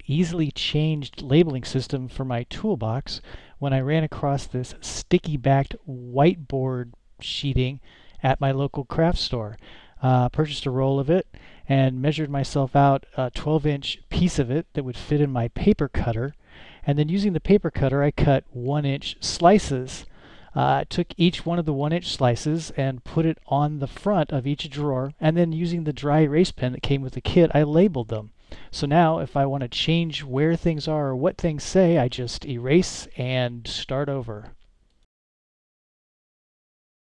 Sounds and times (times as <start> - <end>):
Speech: 0.0 - 34.6.